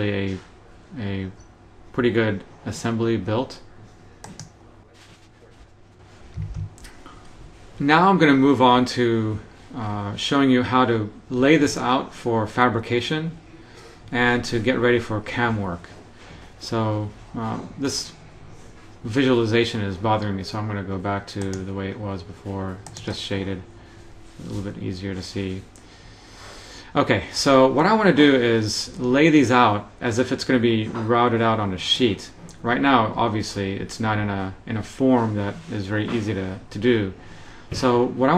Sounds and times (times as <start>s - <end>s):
Speech: 0.0s - 3.7s, 7.8s - 13.4s, 14.1s - 23.7s, 24.4s - 25.7s, 26.9s - 38.3s.